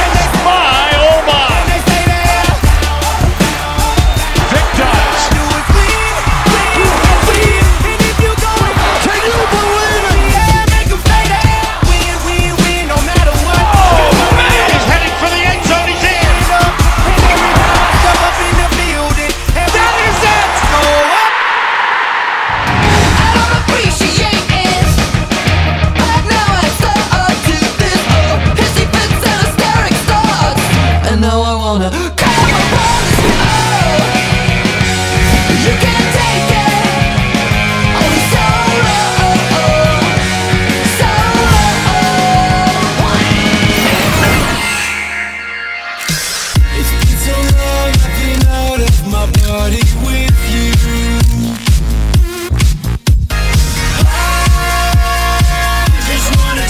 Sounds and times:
Music: 0.0 - 21.3, 22.5 - 56.6.

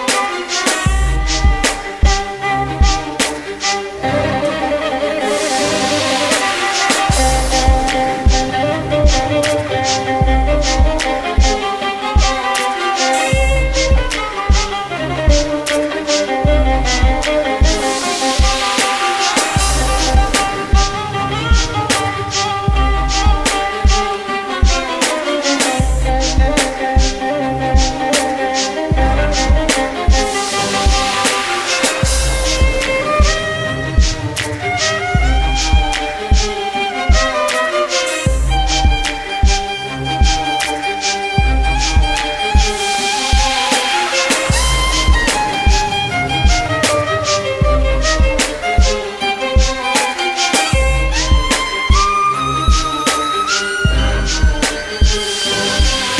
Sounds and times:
Musical instrument: 0.0 - 56.1.

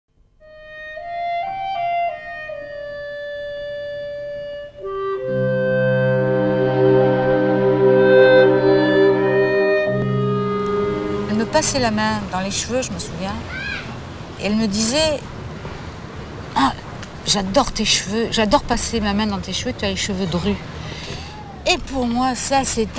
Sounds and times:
Outside, urban or manmade: 0.1 - 22.9
Wind instrument, woodwind instrument: 0.4 - 12.2.

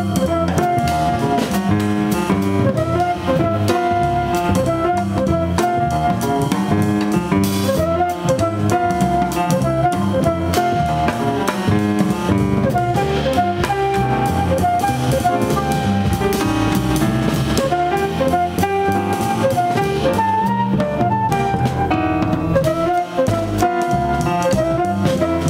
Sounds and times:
Music: 0.0 - 25.4.

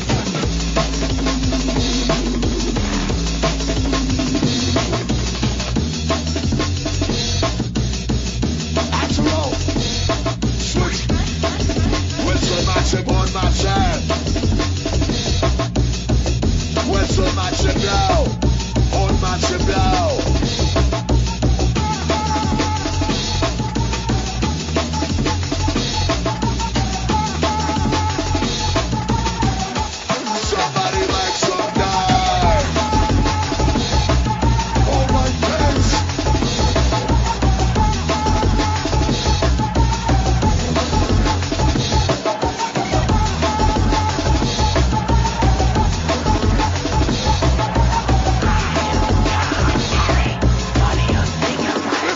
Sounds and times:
Drum and bass: 0.0 - 52.1.

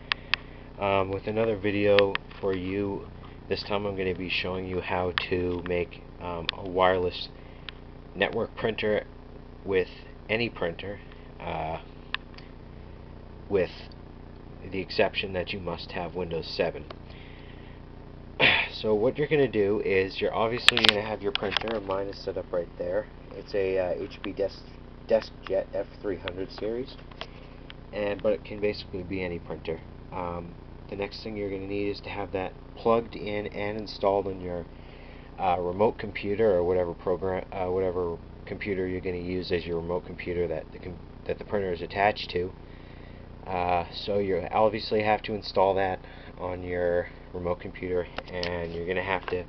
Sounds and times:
Speech: 0.8 - 7.4, 8.2 - 11.9, 13.5 - 14.0, 14.6 - 17.0, 18.4 - 27.0, 27.9 - 34.7, 35.4 - 42.6, 43.4 - 49.4.

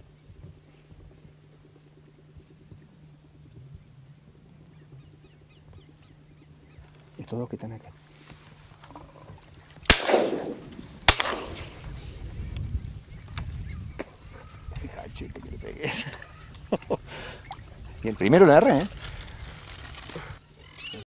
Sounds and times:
Speech: 7.2 - 8.0, 18.0 - 18.9.

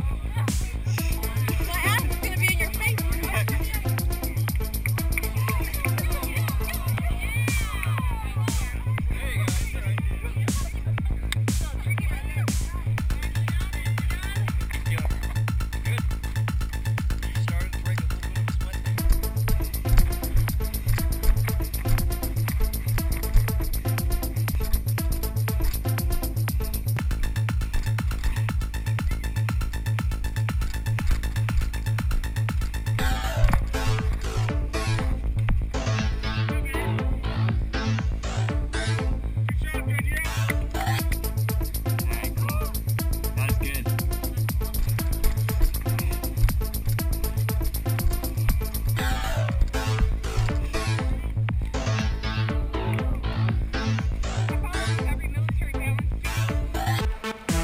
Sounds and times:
Speech: 0.0 - 4.1, 5.4 - 16.1, 17.2 - 19.0, 39.5 - 41.0, 54.5 - 56.1
Music: 0.0 - 57.6
Run: 14.0 - 35.8.

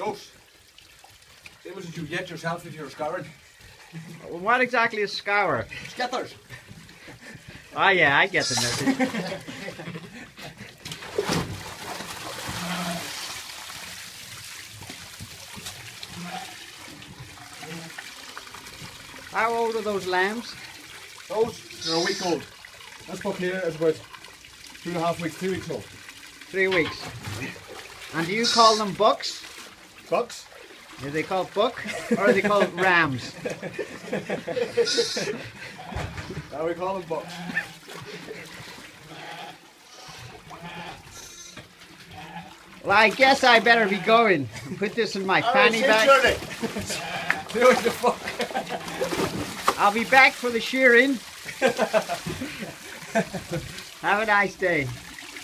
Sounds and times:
Water: 0.0 - 55.4.

